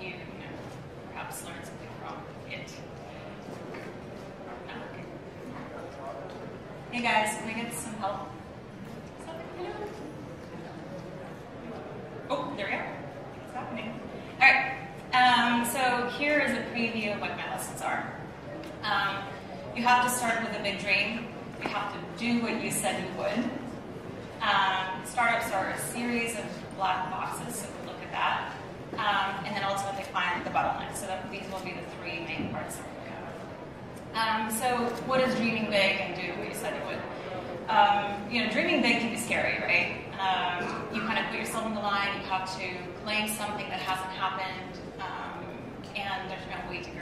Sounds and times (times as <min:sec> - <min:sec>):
Speech: 0:00.0 - 0:03.3, 0:04.5 - 0:08.4, 0:09.2 - 0:23.6, 0:24.4 - 0:33.4, 0:34.1 - 0:47.0.